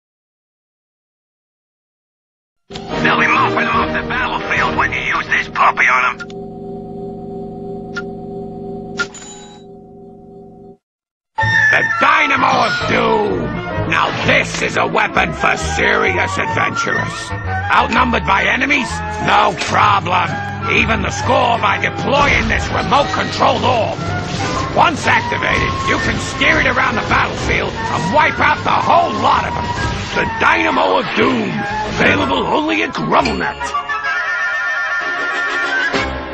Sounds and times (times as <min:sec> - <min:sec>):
Music: 0:02.7 - 0:06.2, 0:11.4 - 0:36.3
Speech: 0:03.0 - 0:06.2, 0:11.8 - 0:24.0, 0:24.8 - 0:29.6, 0:30.2 - 0:33.8.